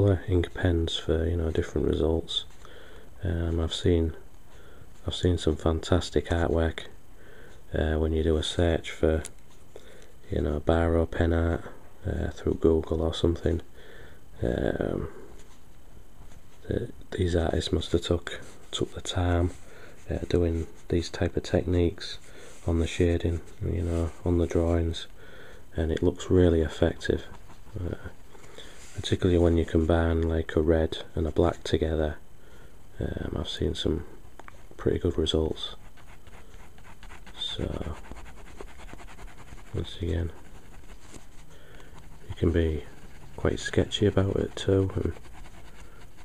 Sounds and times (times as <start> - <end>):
Speech: 0.0 - 2.6, 3.2 - 4.2, 5.0 - 7.0, 7.7 - 9.4, 10.2 - 13.7, 14.4 - 15.2, 16.6 - 25.1, 25.7 - 28.2, 29.0 - 32.2, 33.0 - 34.2, 34.8 - 35.8, 37.3 - 38.1, 39.7 - 40.4, 42.3 - 45.3
Inside, small room: 0.0 - 46.2.